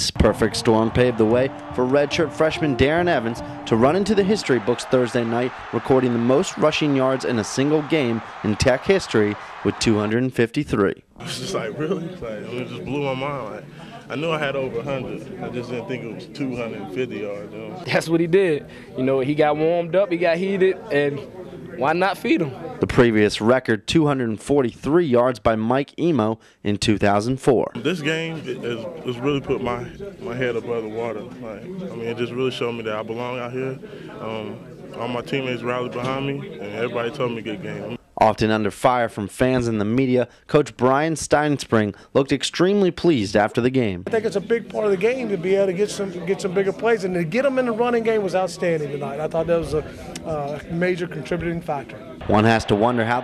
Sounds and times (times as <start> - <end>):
Speech: 0.0 - 53.2
Music: 0.2 - 8.6.